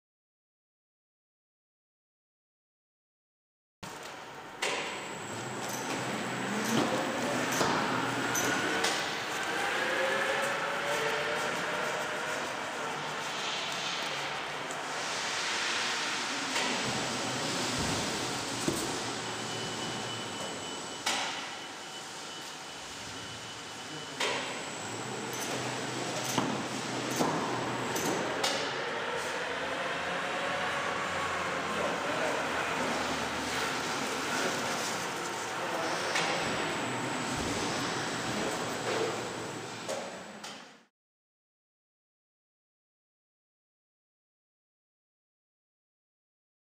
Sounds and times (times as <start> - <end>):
Vehicle: 3.9 - 40.9.